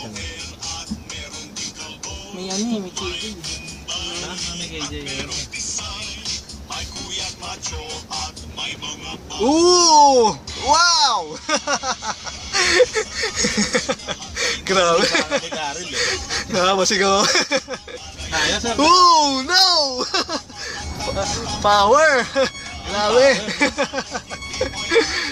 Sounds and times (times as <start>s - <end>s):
Car: 0.0s - 25.3s
Music: 0.0s - 25.3s
Outside, urban or manmade: 0.0s - 25.3s.